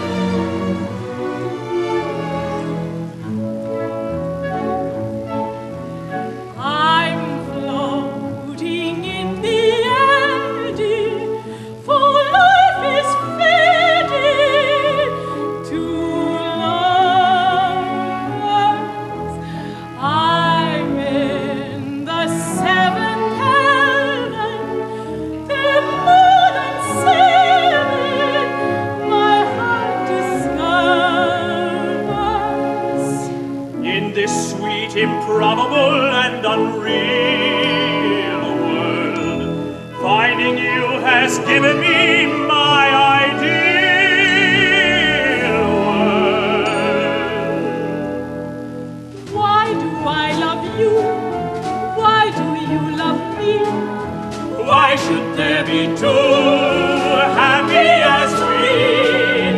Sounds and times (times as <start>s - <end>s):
Music: 0.0s - 59.5s.